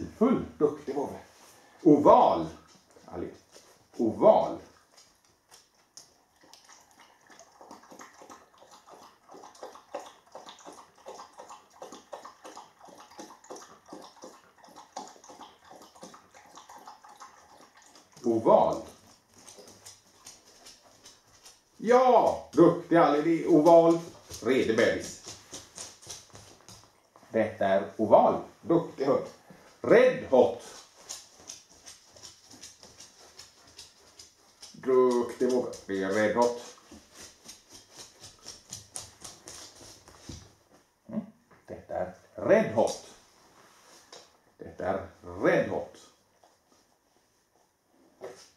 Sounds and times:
Speech: 0.0 - 3.4, 4.0 - 4.7, 18.2 - 18.9, 21.8 - 25.2, 27.3 - 30.7, 34.8 - 36.8, 41.1 - 43.2, 44.6 - 46.1.

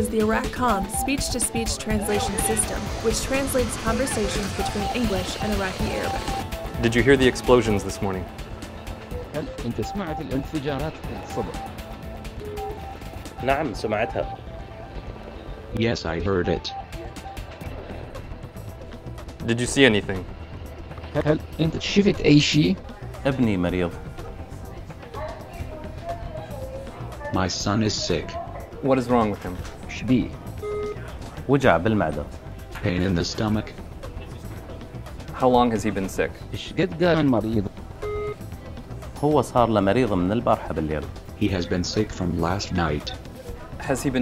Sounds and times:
Conversation: 0.0 - 44.2
Music: 0.0 - 44.2
Male speech, man speaking: 6.8 - 8.3, 9.4 - 11.6, 13.4 - 14.4, 15.8 - 16.7, 19.4 - 20.2, 21.1 - 24.0, 27.2 - 30.4, 31.5 - 33.8, 35.4 - 37.7, 39.2 - 43.2, 43.8 - 44.2.

